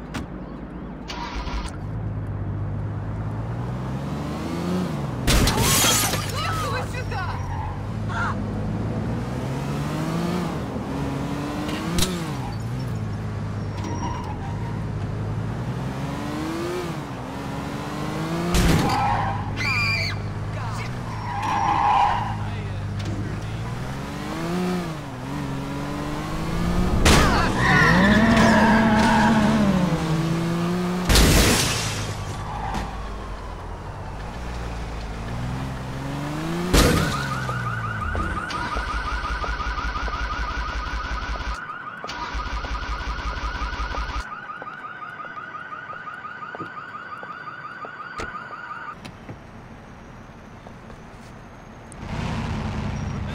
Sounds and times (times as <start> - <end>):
Police car (siren): 21.0 - 22.5, 26.4 - 29.9, 32.2 - 35.2, 36.8 - 49.0.